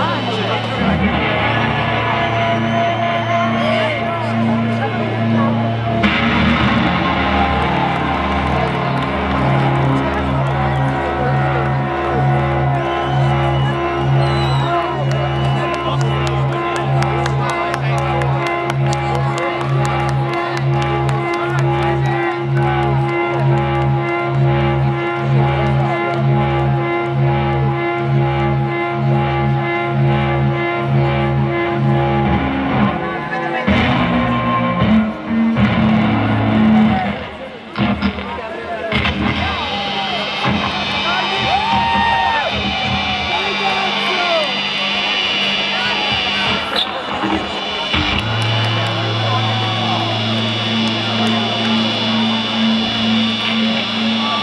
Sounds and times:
Speech: 0.0 - 2.2, 3.5 - 6.1, 8.6 - 23.6, 32.8 - 34.5, 36.7 - 41.6, 43.2 - 54.4.

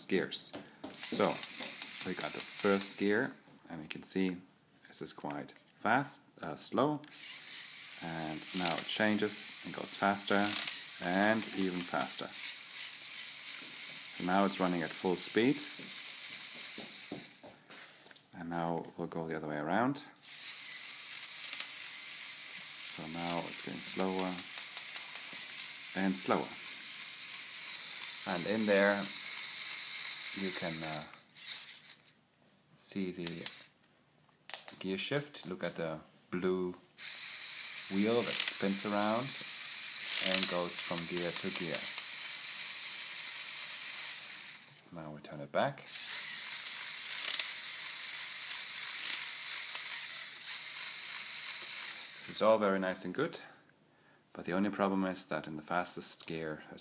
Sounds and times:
Speech: 0.0 - 0.6, 2.1 - 7.1, 8.0 - 12.3, 14.2 - 15.7, 18.4 - 20.2, 23.0 - 24.5, 26.0 - 26.6, 28.3 - 29.1, 30.4 - 31.1, 32.8 - 33.5, 34.8 - 36.8, 37.9 - 39.4, 40.2 - 41.9, 44.9 - 45.9, 52.3 - 53.6, 54.4 - 56.8.

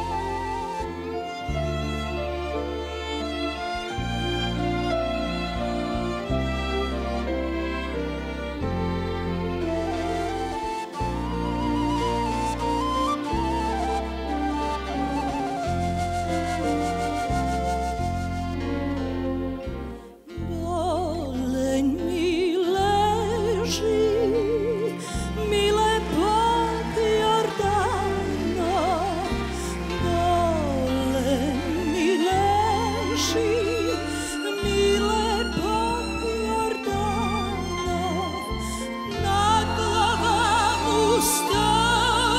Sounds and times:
Music: 0.0 - 42.3.

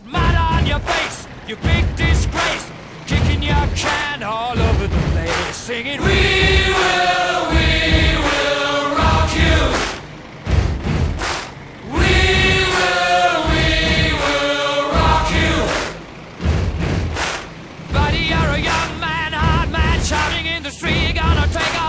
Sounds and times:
Music: 0.0 - 21.8.

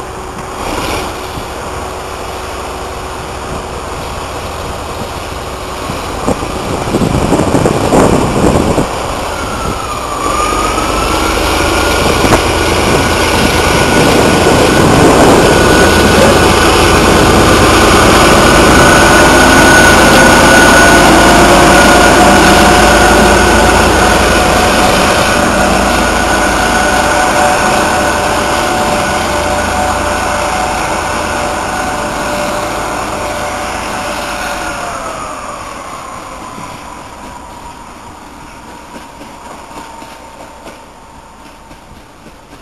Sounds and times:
Engine: 0.0 - 42.6
Vehicle: 0.0 - 42.6.

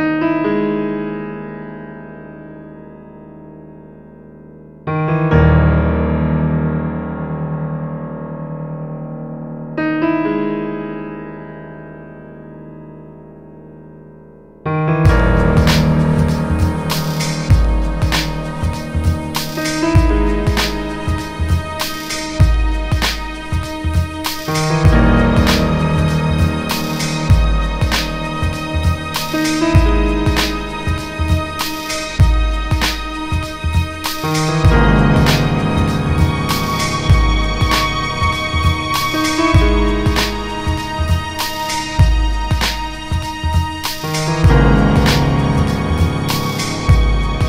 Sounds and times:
Electric piano: 0.0 - 47.4.

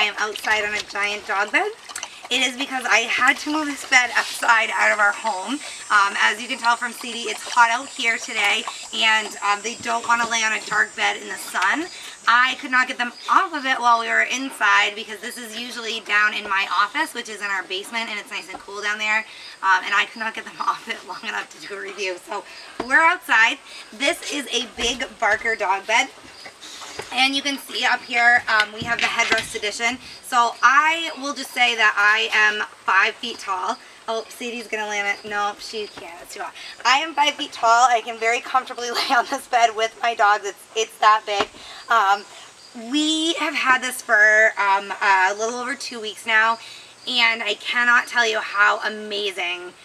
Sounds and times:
Speech: 0.0 - 26.1, 27.1 - 49.8.

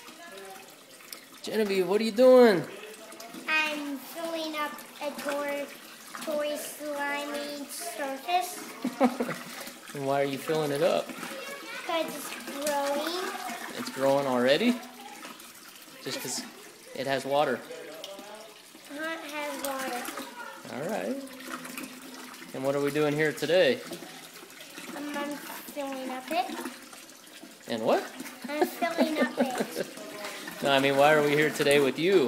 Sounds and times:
Child speech, kid speaking: 0.0 - 0.8, 3.3 - 9.0, 10.6 - 21.4, 24.0 - 26.8, 28.4 - 32.2
Children playing: 0.0 - 1.2, 2.6 - 22.5, 23.8 - 32.2
Liquid: 0.0 - 32.2.

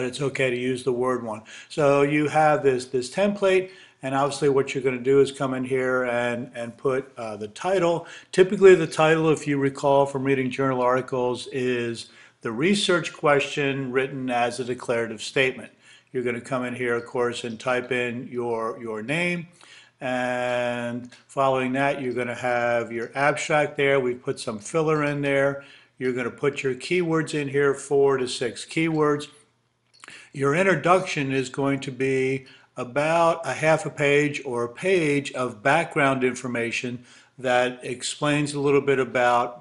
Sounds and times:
Speech: 0.0 - 29.4, 30.0 - 39.6.

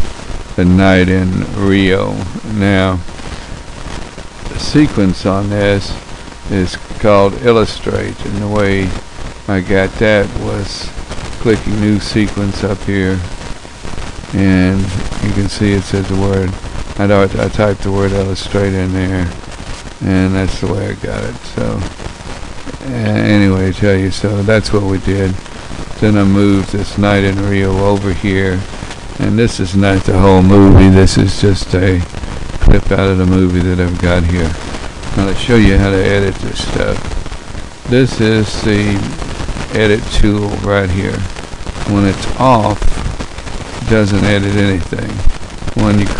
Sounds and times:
Speech: 0.6 - 3.1, 4.5 - 13.3, 14.3 - 19.4, 20.0 - 21.9, 22.7 - 25.4, 26.0 - 34.6, 35.2 - 37.0, 37.9 - 41.3, 41.9 - 43.0, 43.8 - 46.1.

